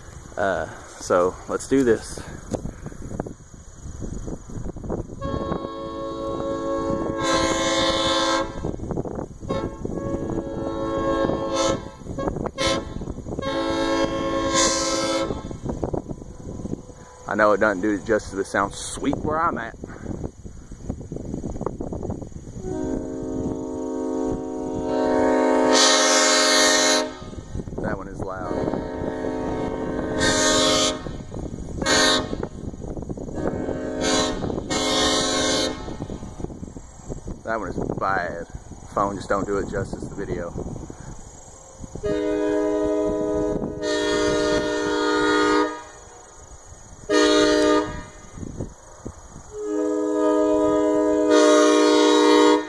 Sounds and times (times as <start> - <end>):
Speech: 0.4 - 2.3, 17.3 - 19.8, 27.8 - 28.6, 37.4 - 40.6.